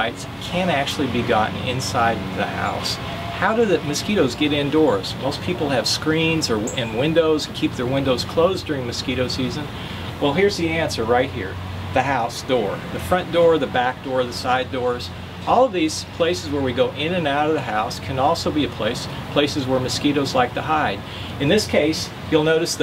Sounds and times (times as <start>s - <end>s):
Speech: 0.0s - 22.8s.